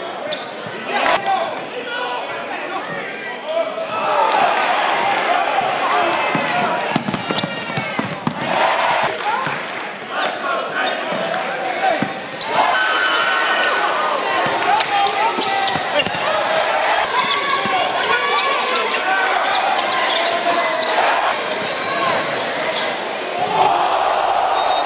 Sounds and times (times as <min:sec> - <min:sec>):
Basketball bounce: 0:06.3 - 0:08.5.